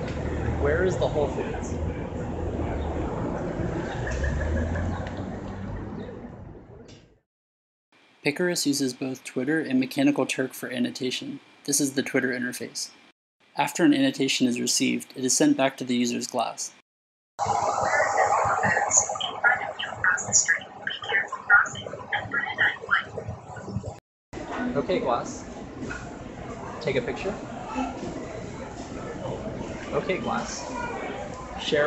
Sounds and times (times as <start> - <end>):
Speech: 0.6 - 1.8, 8.3 - 13.0, 13.6 - 16.8, 17.8 - 23.2, 29.9 - 31.8.